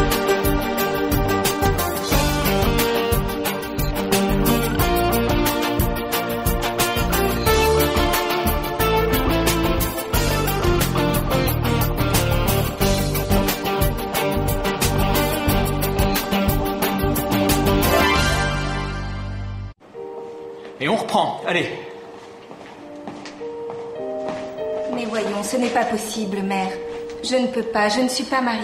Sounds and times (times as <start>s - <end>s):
Music: 0.0s - 28.6s
Speech: 20.8s - 21.9s, 24.9s - 28.6s.